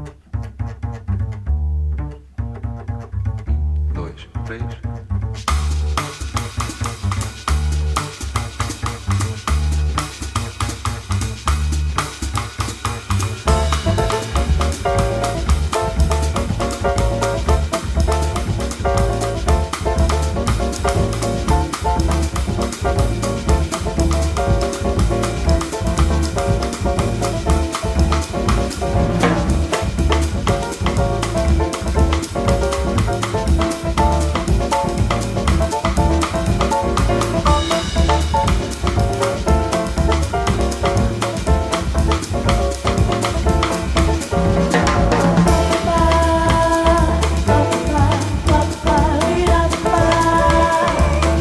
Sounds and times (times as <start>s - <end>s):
Drum kit: 5.2s - 51.4s.